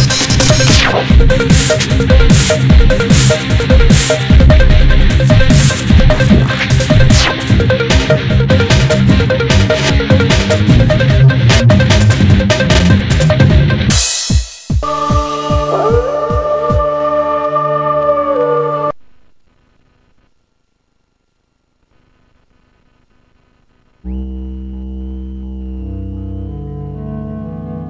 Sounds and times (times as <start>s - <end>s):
Music: 0.0s - 19.0s, 24.1s - 27.9s.